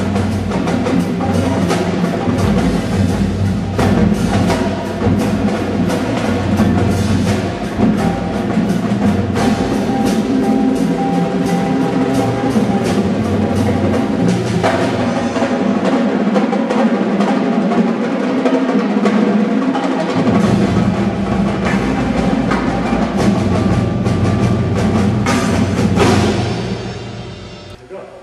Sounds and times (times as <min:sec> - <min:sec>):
Percussion: 0:00.0 - 0:28.0.